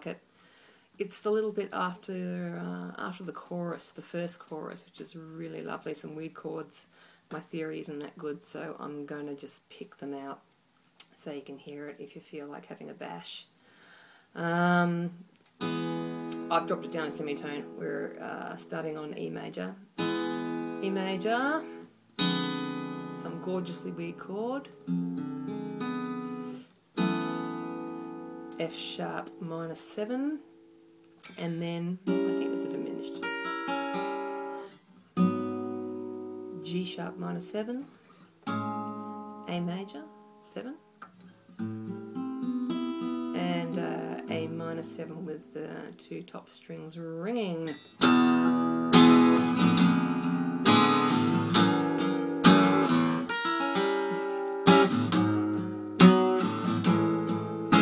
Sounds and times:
Speech: 0.0s - 0.2s, 1.0s - 10.4s, 11.0s - 13.5s, 14.4s - 15.2s, 16.4s - 19.8s, 20.8s - 21.7s, 23.2s - 24.7s, 28.6s - 30.5s, 31.3s - 33.2s, 36.6s - 37.9s, 39.5s - 40.8s, 43.4s - 47.8s
Acoustic guitar: 14.4s - 57.8s.

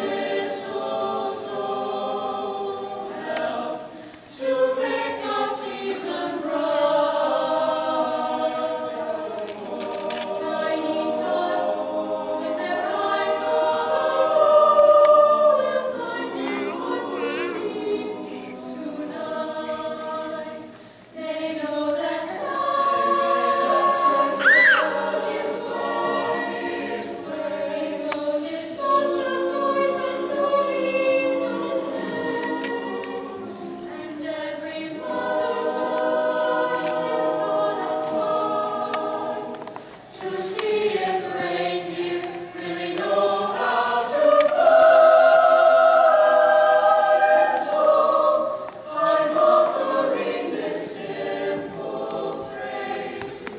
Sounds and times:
Choir: 0.0s - 53.5s.

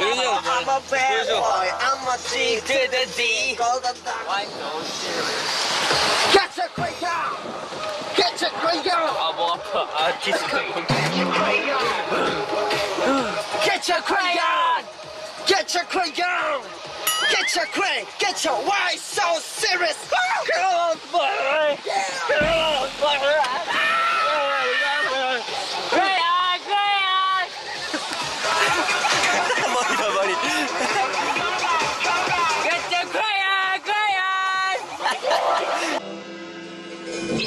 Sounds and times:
Music: 0.0s - 24.2s, 27.3s - 37.4s.

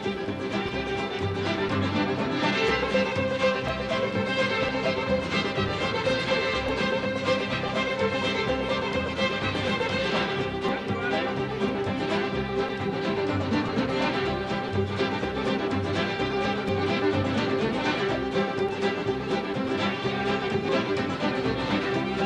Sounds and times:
Music: 0.0s - 22.2s
Speech: 10.7s - 11.6s.

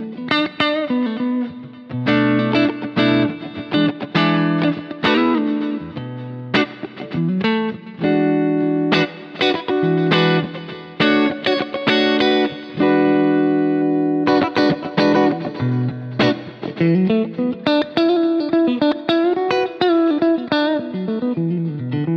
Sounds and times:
Distortion: 0.0s - 22.1s
Music: 0.0s - 22.1s.

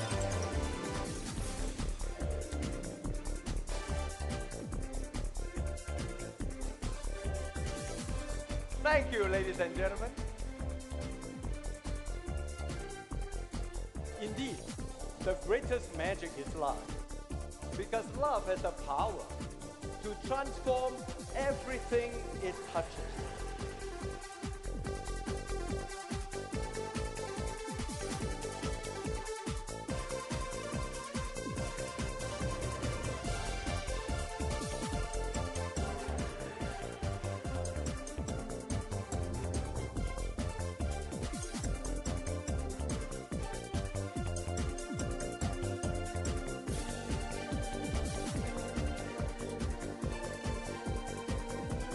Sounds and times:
Music: 0.0s - 51.9s
Speech: 8.8s - 10.2s, 14.1s - 16.9s, 17.8s - 19.4s, 20.0s - 23.4s.

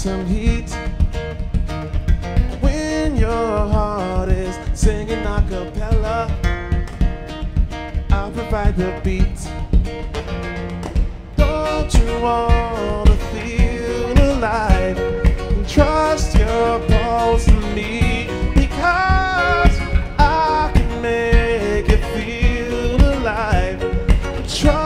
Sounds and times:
Music: 0.0s - 24.8s.

